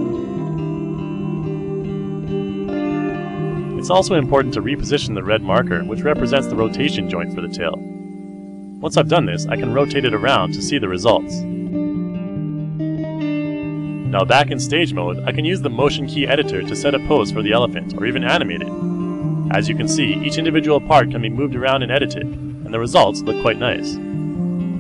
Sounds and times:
Plucked string instrument: 0.0s - 24.8s
Speech: 3.8s - 7.8s, 8.8s - 11.4s, 14.1s - 18.7s, 19.5s - 24.0s.

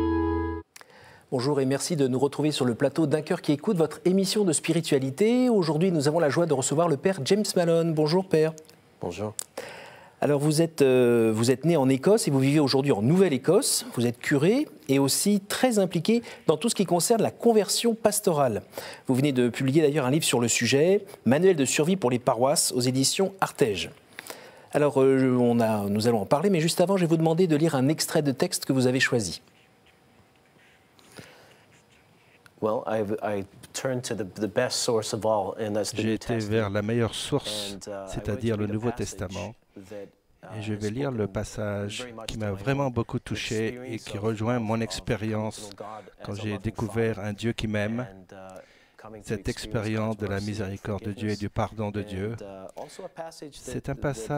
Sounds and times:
Speech: 1.3s - 9.4s, 10.2s - 24.0s, 24.7s - 29.4s, 32.6s - 54.3s.

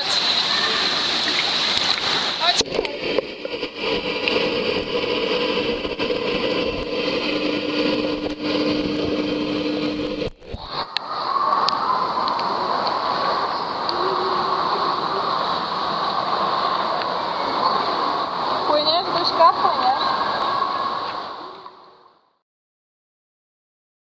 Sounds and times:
Water: 0.0s - 22.4s
Speech: 18.7s - 20.1s.

